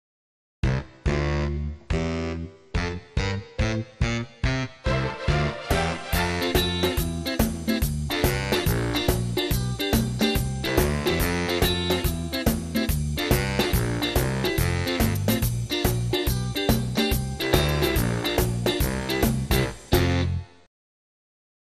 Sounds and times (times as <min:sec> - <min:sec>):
Music: 0:00.6 - 0:20.7.